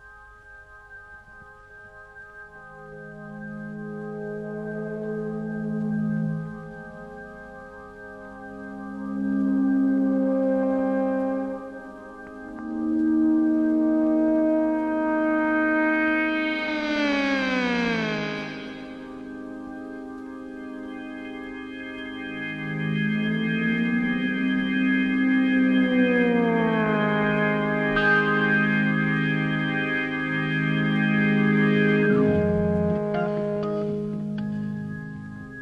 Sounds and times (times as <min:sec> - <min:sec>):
Music: 0:00.0 - 0:35.6.